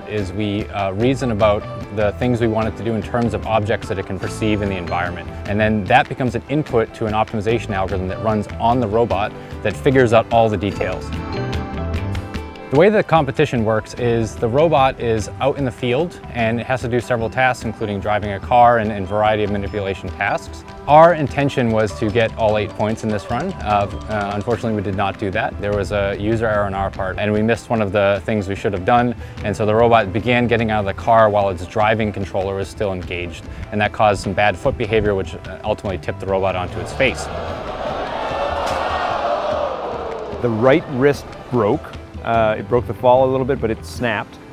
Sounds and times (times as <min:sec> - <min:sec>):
Speech: 0:00.0 - 0:11.1, 0:12.7 - 0:37.3, 0:40.4 - 0:44.4
Music: 0:00.0 - 0:44.5.